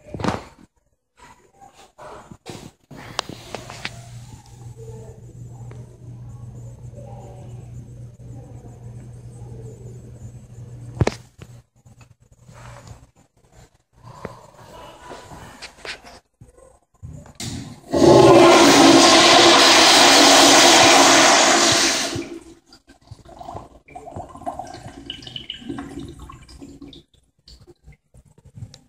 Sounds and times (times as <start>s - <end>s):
Toilet flush: 17.4s - 27.1s.